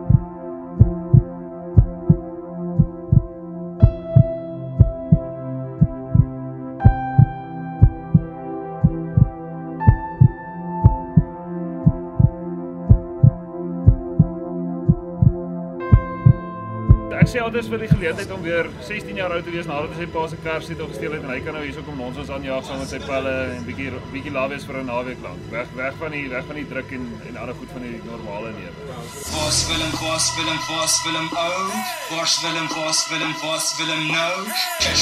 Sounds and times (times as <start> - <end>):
Music: 0.0 - 35.0
Speech: 17.1 - 30.3.